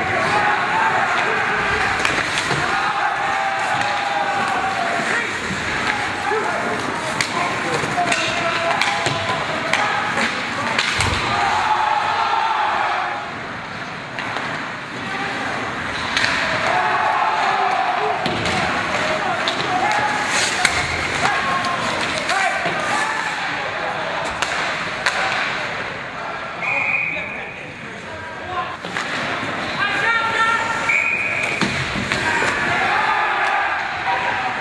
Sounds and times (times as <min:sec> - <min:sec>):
Speech: 0:04.1 - 0:10.9, 0:26.2 - 0:30.9.